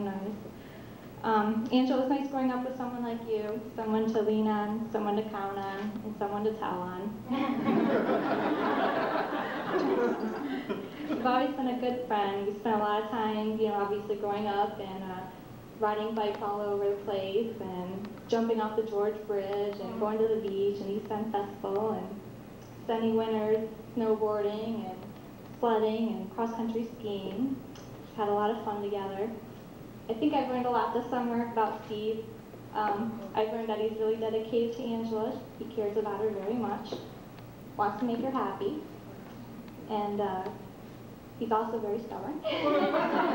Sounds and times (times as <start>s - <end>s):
Female speech, woman speaking: 0.0s - 0.4s, 1.2s - 7.4s, 11.2s - 22.2s, 22.9s - 29.4s, 30.1s - 37.1s, 37.8s - 38.9s, 39.9s - 40.7s, 41.4s - 43.3s
Narration, monologue: 0.0s - 43.3s.